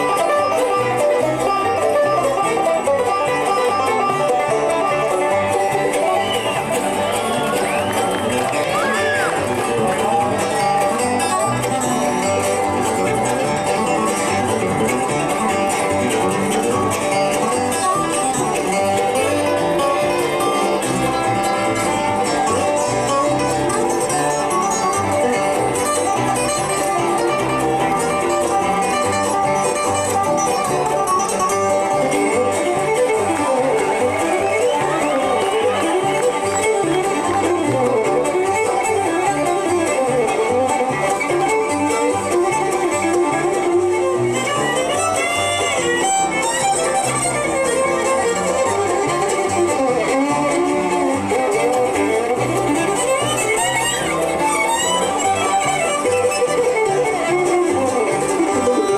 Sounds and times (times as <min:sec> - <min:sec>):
Bluegrass: 0:00.0 - 0:58.9
Musical instrument: 0:00.0 - 0:58.9.